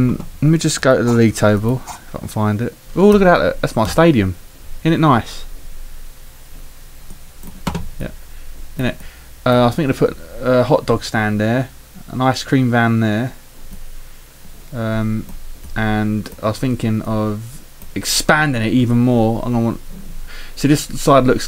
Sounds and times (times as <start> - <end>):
Speech: 0.0 - 5.5, 8.8 - 13.4, 14.7 - 19.8, 20.6 - 21.4.